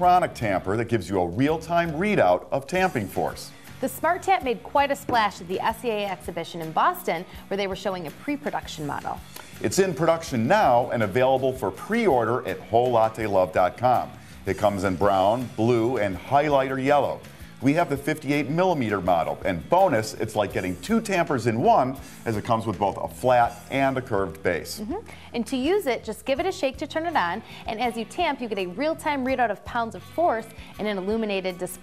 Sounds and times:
Music: 0.0 - 31.8
Speech: 0.0 - 31.8.

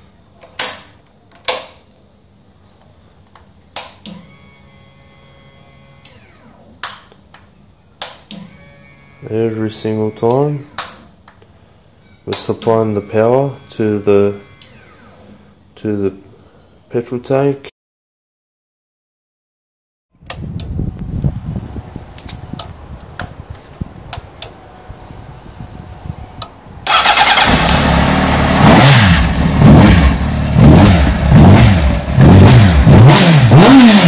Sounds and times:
Motorcycle: 24.1 - 34.0.

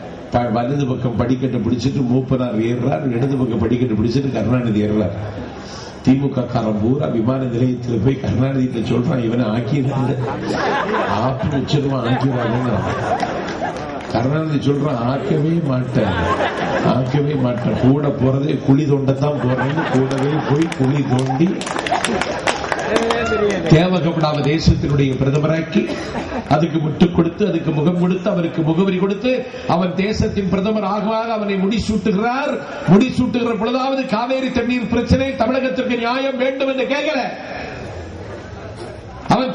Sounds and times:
Narration, monologue: 0.0 - 22.4, 23.1 - 37.8
Male speech, man speaking: 0.3 - 5.2, 6.1 - 10.4, 11.1 - 13.0, 14.1 - 21.6, 22.9 - 25.9, 26.5 - 37.4, 39.3 - 39.5.

